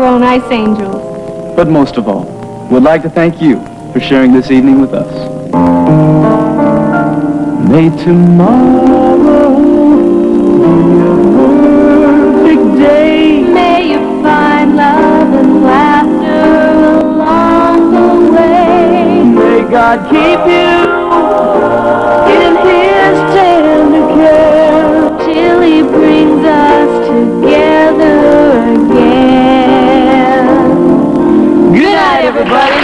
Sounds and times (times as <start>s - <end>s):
Music: 0.0s - 32.8s.